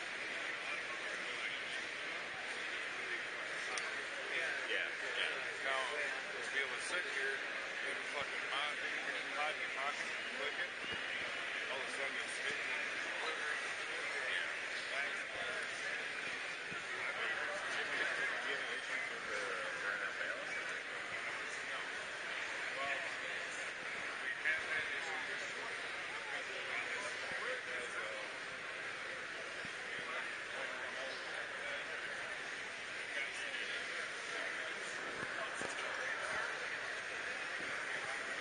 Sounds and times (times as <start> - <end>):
Speech: 0.0 - 38.4.